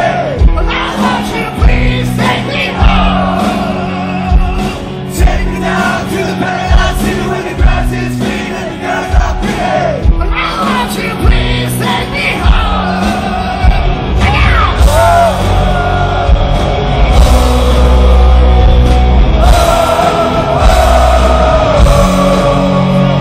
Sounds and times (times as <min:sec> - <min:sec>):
Rock and roll: 0:00.0 - 0:23.2.